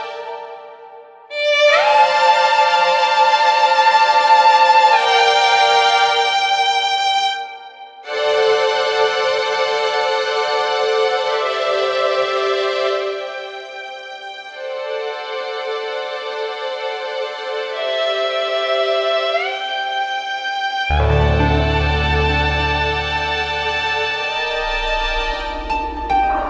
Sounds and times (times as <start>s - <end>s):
Background music: 0.0s - 26.4s.